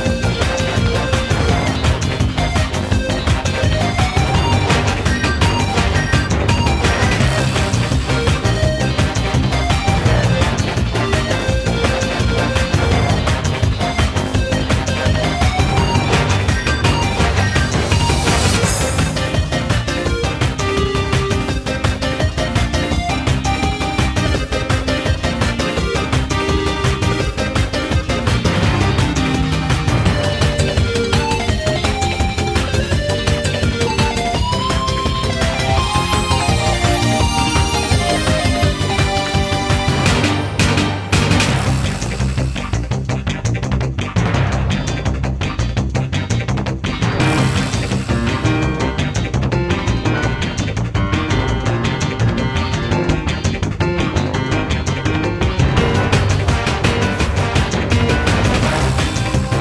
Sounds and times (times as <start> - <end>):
Music: 0.0 - 59.6.